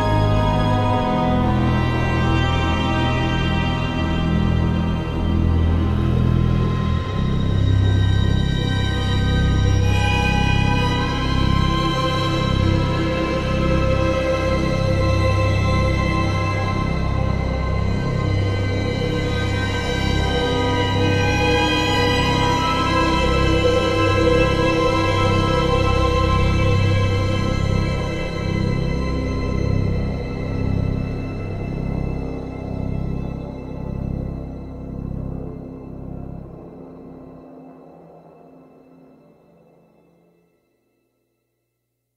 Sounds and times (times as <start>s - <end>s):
Music: 0.0s - 41.8s.